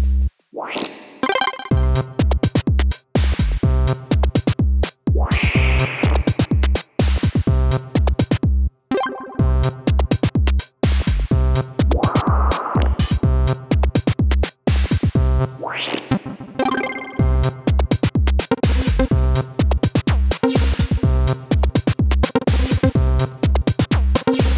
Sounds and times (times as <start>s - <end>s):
Drum machine: 0.0s - 8.6s, 9.4s - 15.4s, 16.0s - 24.5s.